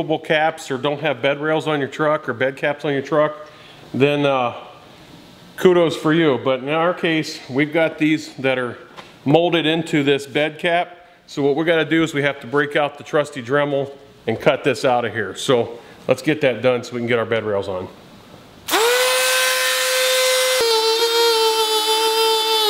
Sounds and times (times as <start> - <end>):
Speech: 0.0 - 3.4, 4.0 - 4.7, 5.6 - 18.0.